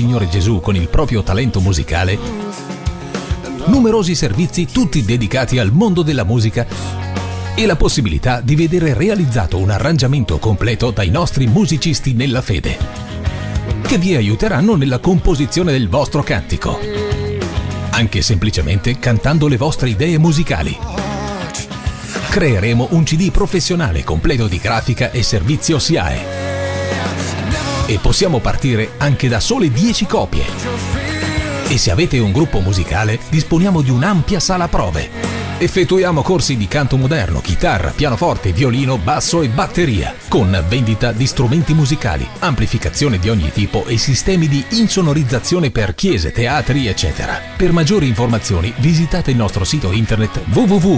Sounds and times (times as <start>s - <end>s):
Speech: 0.0s - 2.5s, 3.5s - 7.0s, 7.6s - 12.9s, 13.7s - 17.2s, 17.9s - 26.3s, 27.8s - 50.9s
Music: 0.0s - 50.9s.